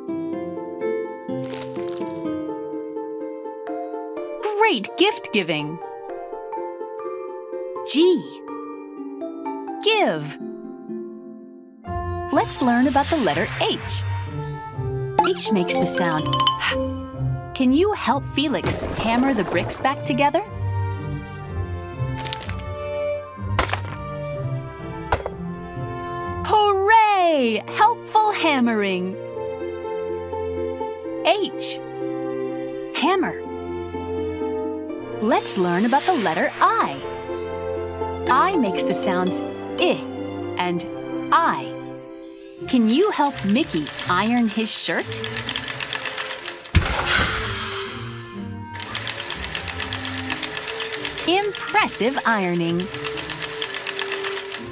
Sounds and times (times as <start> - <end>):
Music: 0.0 - 54.7
Speech: 4.4 - 5.8, 7.8 - 8.4, 9.8 - 10.4, 12.3 - 14.0, 15.2 - 16.8, 17.6 - 20.5, 26.4 - 29.2, 31.2 - 31.8, 32.9 - 33.4, 35.2 - 37.0, 38.3 - 41.7, 42.7 - 45.2, 51.3 - 52.9.